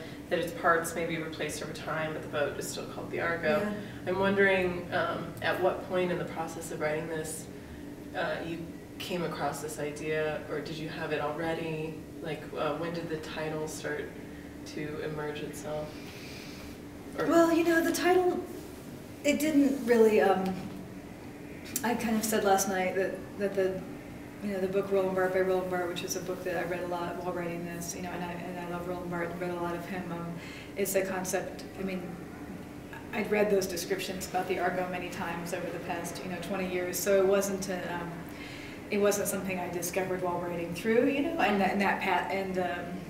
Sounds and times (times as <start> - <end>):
Speech: 0.0 - 7.5, 8.2 - 15.9, 17.2 - 18.6, 19.2 - 20.7, 21.8 - 32.2, 32.9 - 38.3, 38.9 - 43.1.